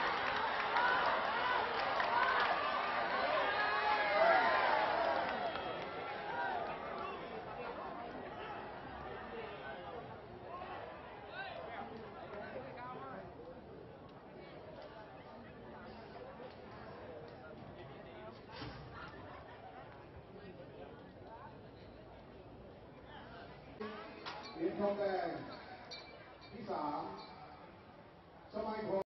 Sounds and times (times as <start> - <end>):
Outside, urban or manmade: 0.0 - 29.0
Speech: 28.5 - 29.1.